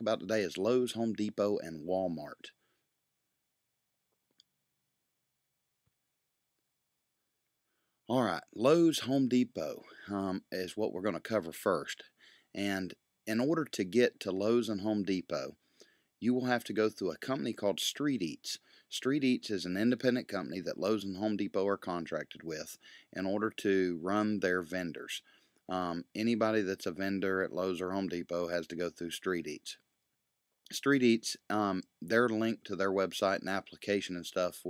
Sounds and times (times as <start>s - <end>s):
Speech: 0.0s - 2.5s, 8.1s - 15.5s, 16.2s - 29.8s, 30.7s - 34.7s.